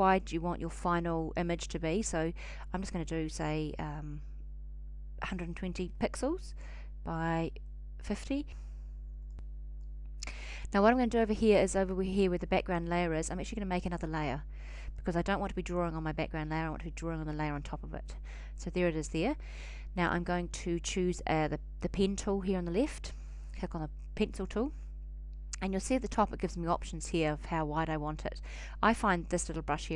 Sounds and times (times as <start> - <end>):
Speech: 0.0 - 4.2, 5.2 - 8.6, 10.7 - 14.4, 15.0 - 19.4, 20.0 - 24.8, 25.6 - 29.9.